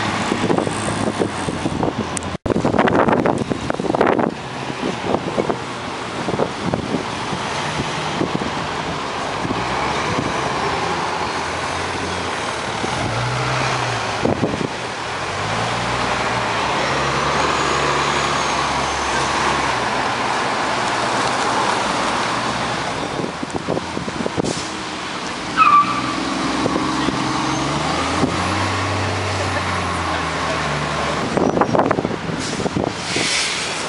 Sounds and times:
Bus: 0.0 - 33.8
Car: 0.0 - 33.8
Traffic noise, roadway noise: 0.0 - 33.8.

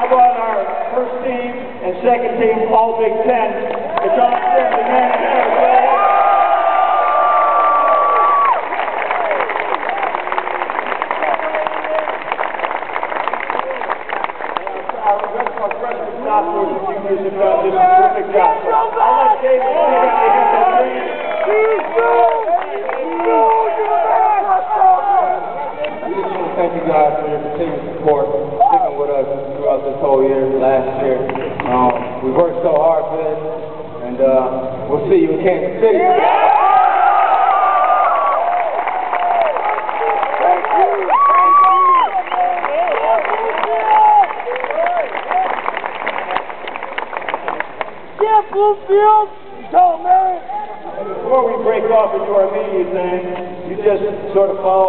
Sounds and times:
Male speech, man speaking: 0.0 - 5.9, 14.7 - 36.2, 40.4 - 41.1, 48.2 - 54.8.

